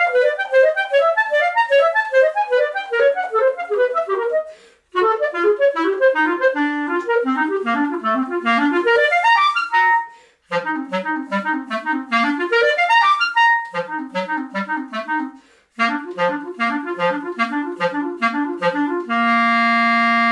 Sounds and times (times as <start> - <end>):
Wind instrument, woodwind instrument: 0.0 - 20.3.